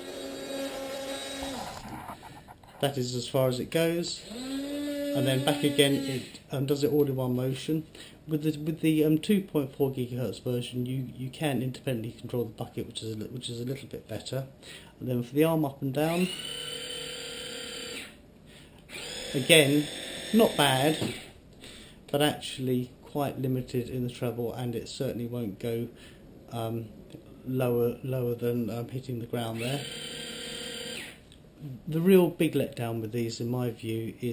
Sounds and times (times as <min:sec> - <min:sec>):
Inside, small room: 0:00.0 - 0:34.3
Speech: 0:02.8 - 0:04.3, 0:05.2 - 0:16.3, 0:19.3 - 0:21.1, 0:22.1 - 0:29.8, 0:31.6 - 0:34.3.